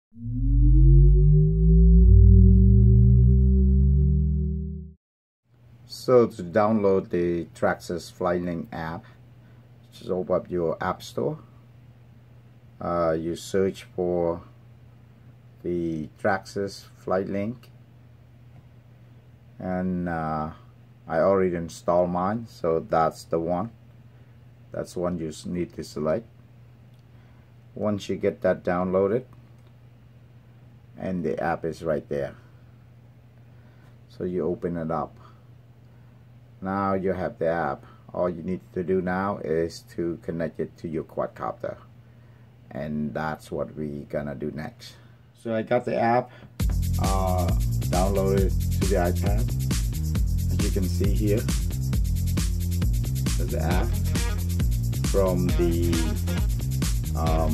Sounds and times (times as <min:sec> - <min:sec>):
Inside, small room: 0:00.1 - 0:57.5
Speech: 0:05.9 - 0:09.1, 0:09.9 - 0:11.5, 0:12.8 - 0:14.6, 0:15.6 - 0:17.8, 0:19.6 - 0:23.8, 0:24.7 - 0:26.3, 0:27.8 - 0:29.4, 0:31.0 - 0:32.4, 0:34.1 - 0:35.4, 0:36.6 - 0:41.9, 0:42.7 - 0:46.3, 0:47.0 - 0:49.5, 0:50.5 - 0:51.5, 0:53.4 - 0:54.0, 0:55.1 - 0:56.2, 0:57.2 - 0:57.5.